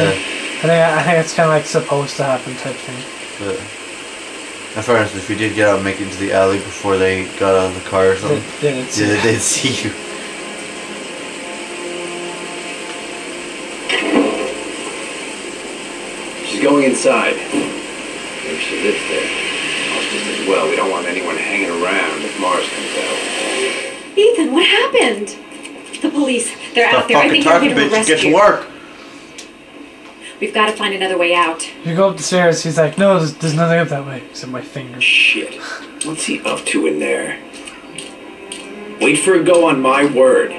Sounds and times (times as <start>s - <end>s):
Speech: 0.0s - 3.7s, 4.8s - 10.0s, 16.5s - 17.5s, 18.5s - 19.3s, 19.9s - 23.3s, 24.2s - 25.4s, 26.0s - 28.7s, 30.4s - 37.4s, 39.0s - 40.5s
Rain on surface: 0.0s - 40.5s.